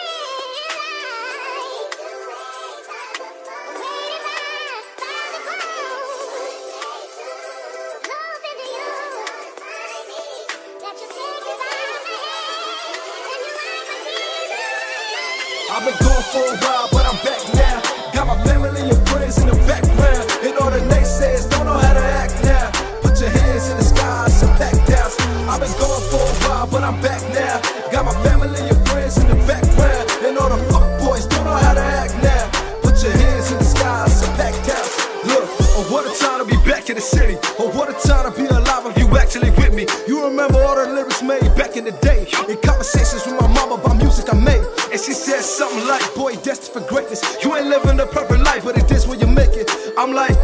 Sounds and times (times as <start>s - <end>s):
Funk: 15.8s - 44.9s, 47.2s - 50.4s.